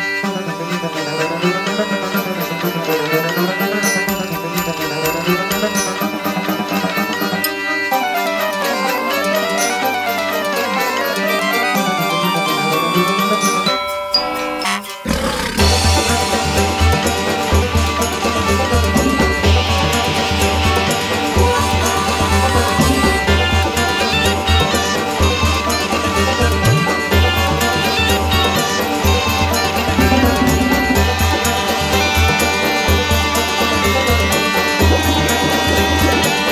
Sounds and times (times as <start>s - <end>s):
Music: 0.0s - 36.5s.